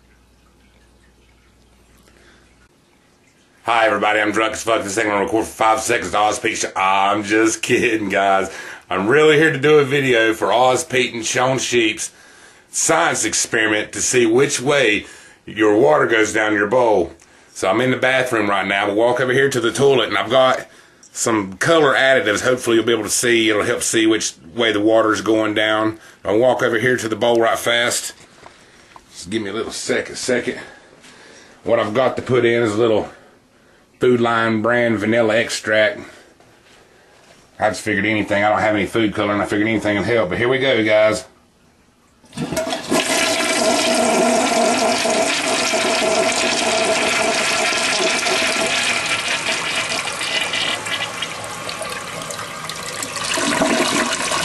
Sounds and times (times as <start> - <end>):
Toilet flush: 42.3 - 54.4.